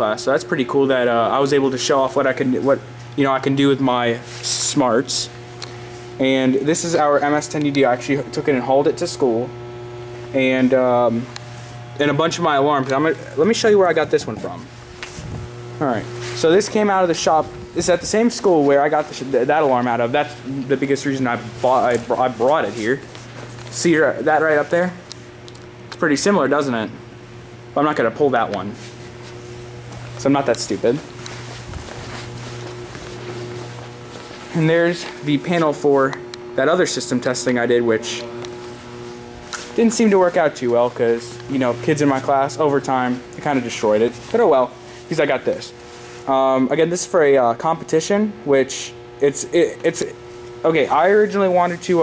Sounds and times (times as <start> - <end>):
Speech: 0.0 - 5.3, 6.2 - 9.5, 10.3 - 11.3, 12.0 - 14.7, 15.8 - 23.1, 23.8 - 25.0, 26.0 - 27.0, 27.8 - 28.8, 30.2 - 31.1, 34.5 - 38.4, 39.8 - 52.0.